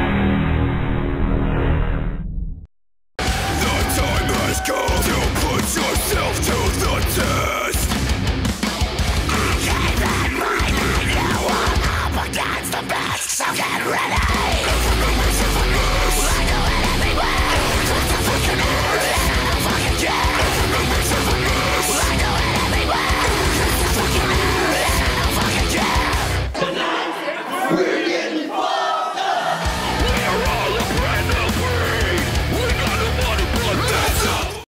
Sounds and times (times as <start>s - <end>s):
Music: 3.2s - 26.6s, 29.5s - 34.6s
Speech: 3.5s - 7.9s, 9.3s - 16.6s, 29.8s - 34.6s.